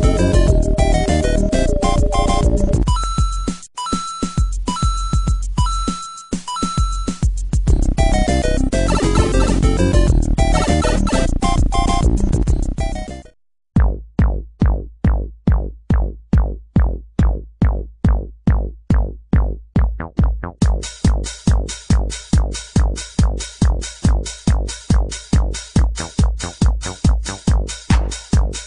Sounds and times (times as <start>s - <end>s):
Music: 0.0s - 28.6s.